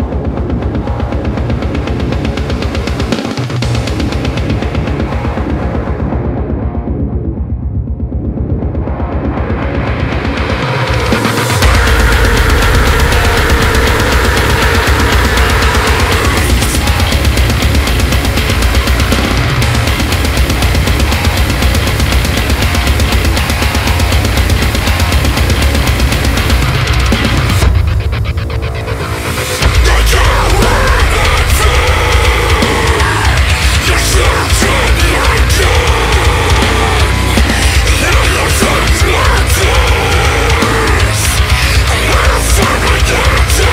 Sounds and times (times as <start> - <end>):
Angry music: 0.0 - 43.7.